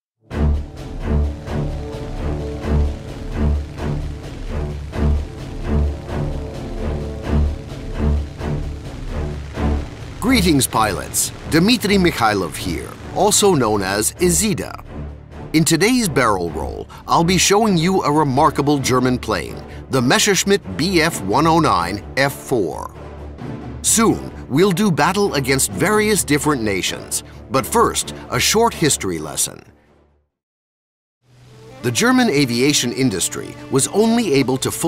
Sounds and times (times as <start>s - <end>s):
Music: 0.2s - 30.4s, 31.2s - 34.8s
Speech: 10.2s - 14.8s, 15.6s - 23.0s, 23.8s - 29.7s, 31.8s - 34.8s.